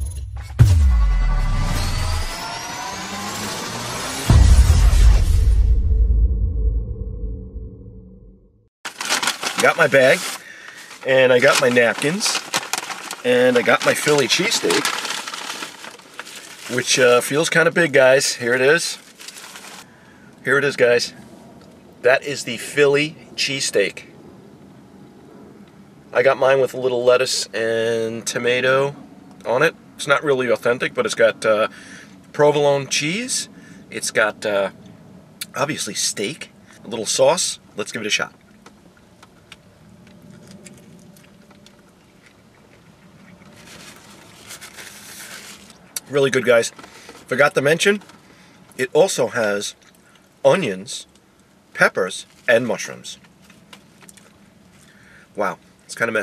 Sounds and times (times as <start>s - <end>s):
Music: 0.0s - 3.2s, 3.8s - 7.0s
Speech: 9.6s - 10.3s, 11.0s - 12.5s, 13.2s - 14.9s, 16.7s - 19.0s, 20.4s - 21.2s, 22.0s - 24.1s, 26.1s - 31.7s, 32.3s - 34.8s, 35.4s - 38.4s, 46.0s - 48.0s, 48.8s - 49.8s, 50.4s - 51.1s, 51.8s - 53.2s, 55.4s - 56.2s.